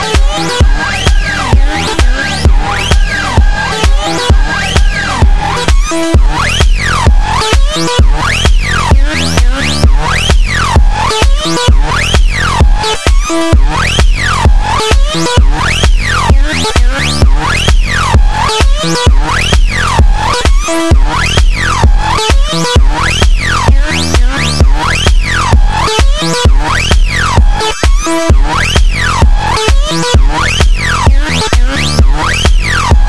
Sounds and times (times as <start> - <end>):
Music: 0.0 - 33.0.